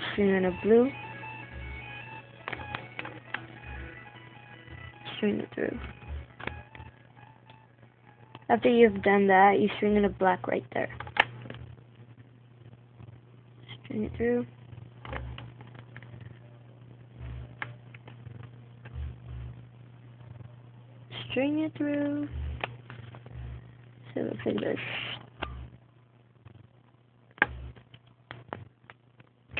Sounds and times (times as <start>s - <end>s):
Speech: 0.0s - 1.0s, 5.1s - 5.9s, 8.5s - 11.0s, 13.7s - 14.5s, 20.3s - 22.3s, 24.1s - 25.2s
Inside, small room: 0.0s - 29.5s.